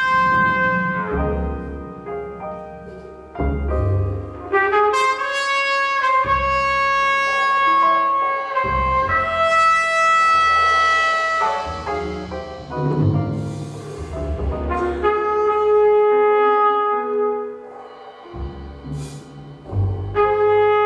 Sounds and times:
Trumpet: 0.0s - 2.1s, 4.4s - 12.3s, 14.6s - 18.0s, 19.0s - 20.8s.

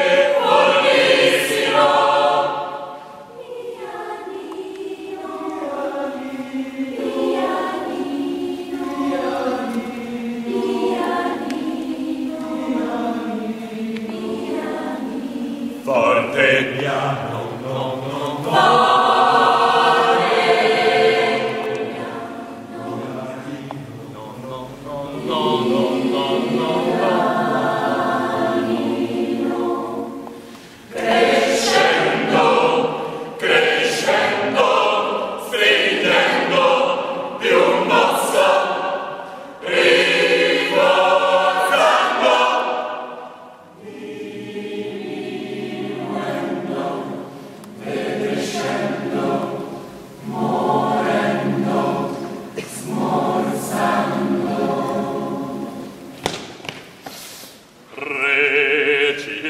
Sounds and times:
Vocal music: 0.0s - 56.2s, 57.7s - 59.5s
Choir: 0.0s - 56.4s, 57.7s - 59.5s.

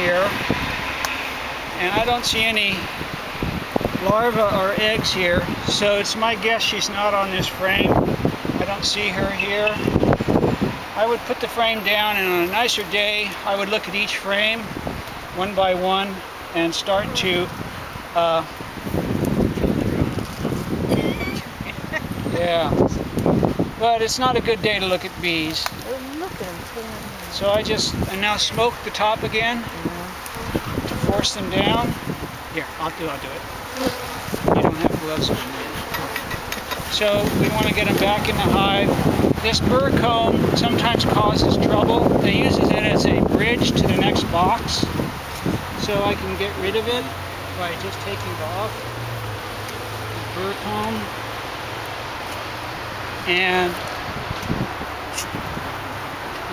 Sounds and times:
Bee, wasp, etc.: 25.0s - 52.4s
Fly, housefly: 29.6s - 31.3s, 32.8s - 38.0s.

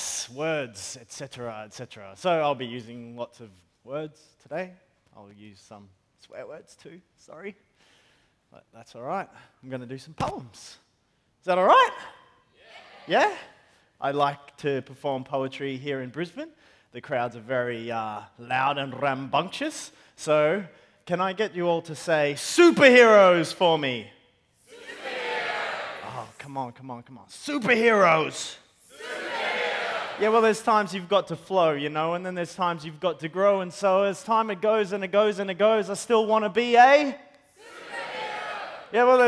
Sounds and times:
Speech: 0.0s - 7.6s, 8.6s - 10.8s, 11.4s - 12.1s, 13.1s - 24.1s, 26.0s - 28.6s, 30.2s - 37.2s, 39.0s - 39.2s.

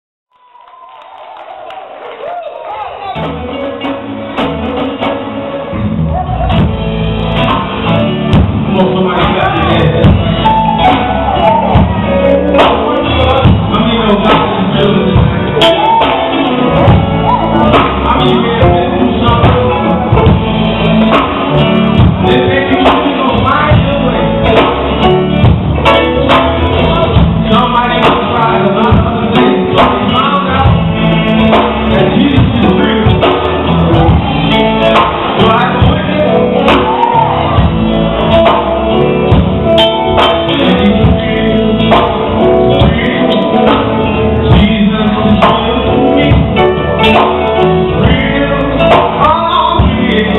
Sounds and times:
Music: 0.4s - 50.3s
Male singing: 7.4s - 37.7s, 40.1s - 50.3s.

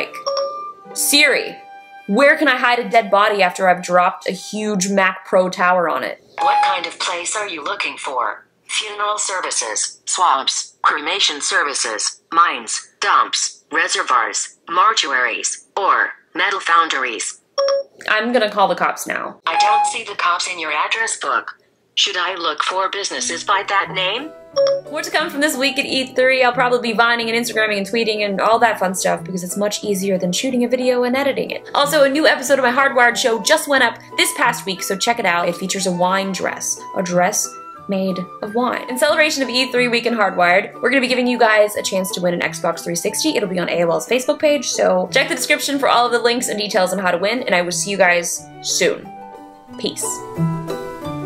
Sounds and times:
Speech: 0.0s - 0.2s, 1.0s - 17.4s, 18.0s - 24.3s, 24.9s - 49.1s, 49.8s - 50.2s.

